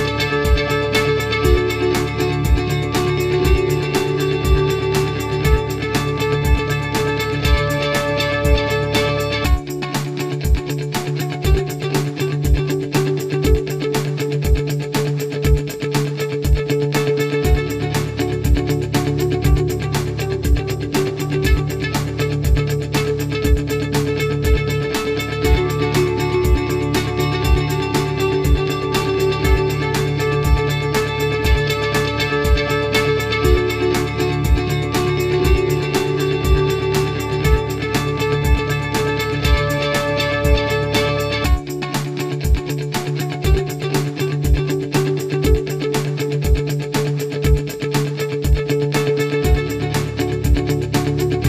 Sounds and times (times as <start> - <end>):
Music: 0.0 - 51.4.